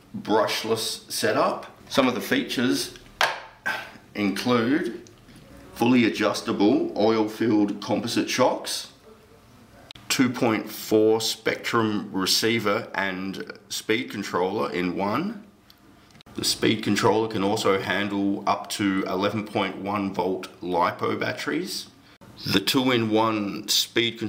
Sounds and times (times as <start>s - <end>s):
Speech: 0.1s - 3.0s, 4.2s - 15.5s, 16.3s - 24.2s.